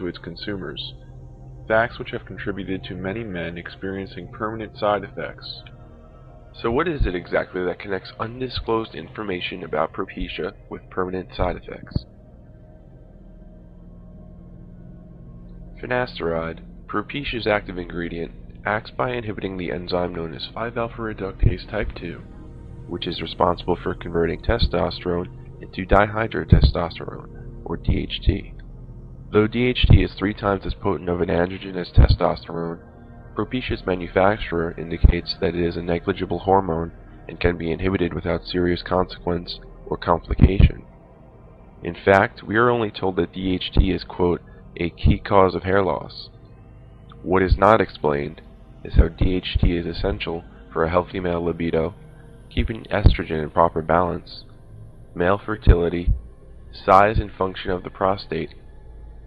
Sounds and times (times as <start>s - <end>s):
Speech: 0.0s - 1.0s, 1.7s - 5.7s, 6.6s - 12.1s, 15.8s - 22.3s, 22.9s - 28.5s, 29.3s - 32.8s, 33.4s - 40.9s, 41.8s - 46.3s, 47.1s - 54.4s, 55.2s - 56.2s, 56.8s - 58.5s
Music: 0.0s - 59.2s.